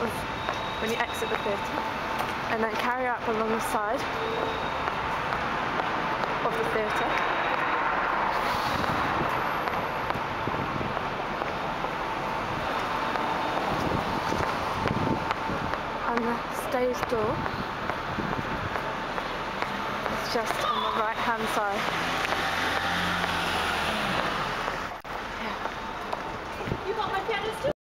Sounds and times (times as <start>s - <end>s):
Speech: 2.5s - 4.1s, 6.5s - 7.2s, 16.1s - 17.4s, 20.2s - 21.8s, 26.6s - 27.8s
Car: 3.8s - 27.6s.